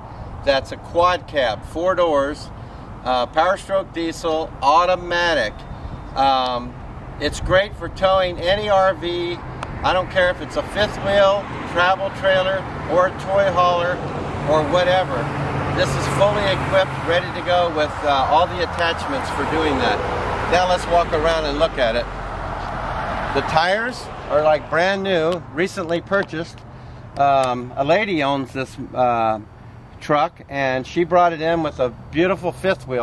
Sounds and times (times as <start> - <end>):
Car: 0.0 - 33.0
Speech: 0.4 - 5.6, 6.2 - 22.1, 23.3 - 26.6, 27.2 - 33.0.